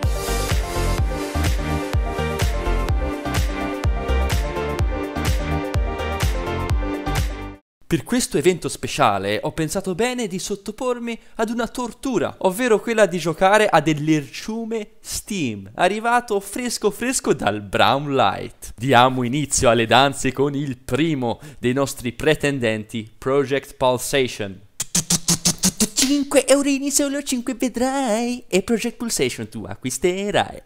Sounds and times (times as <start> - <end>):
Speech: 7.9 - 30.6.